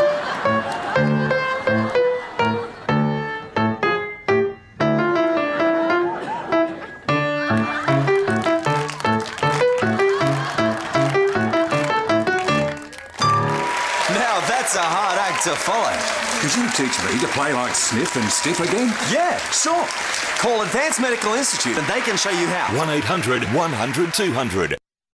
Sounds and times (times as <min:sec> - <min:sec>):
Speech: 0:14.1 - 0:24.8.